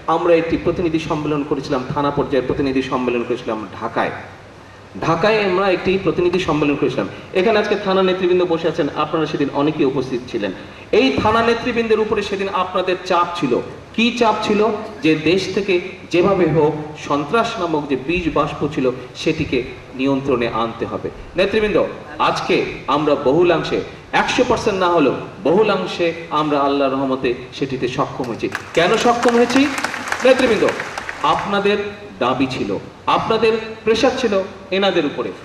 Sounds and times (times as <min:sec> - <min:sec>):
Narration, monologue: 0:00.0 - 0:35.4
Male speech, man speaking: 0:00.1 - 0:04.3, 0:05.0 - 0:35.4.